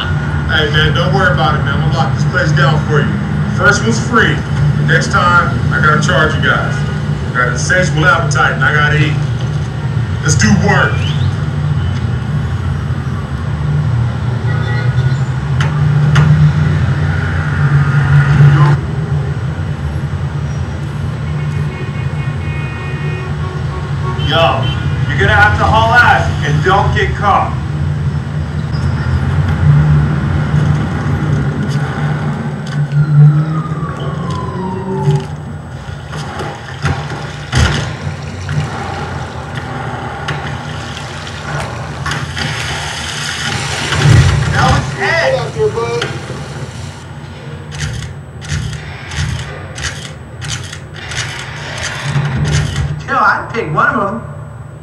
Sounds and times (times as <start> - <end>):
Speech: 0.5 - 6.8, 7.4 - 9.2, 10.2 - 11.2, 24.2 - 27.6, 44.5 - 46.2.